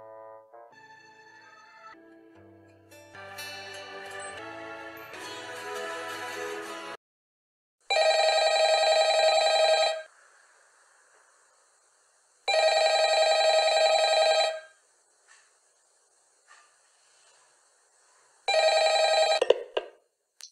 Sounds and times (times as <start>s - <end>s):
Telephone bell ringing: 7.9s - 10.1s, 12.5s - 14.8s, 18.5s - 19.5s.